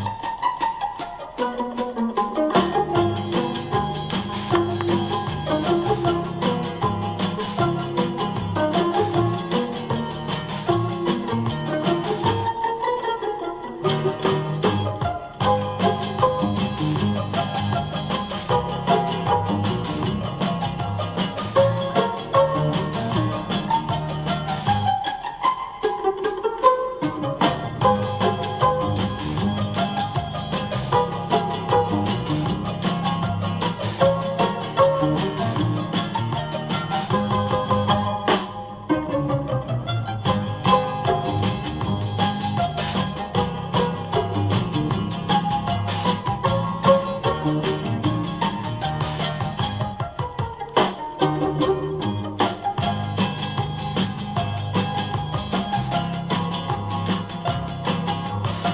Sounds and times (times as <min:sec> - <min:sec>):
Musical instrument: 0:00.0 - 0:58.7.